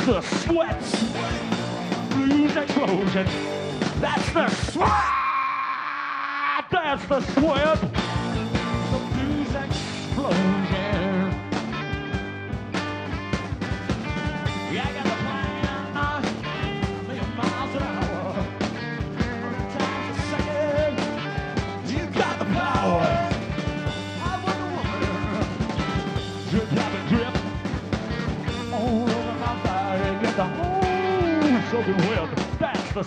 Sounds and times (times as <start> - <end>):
Blues: 0.0 - 33.0.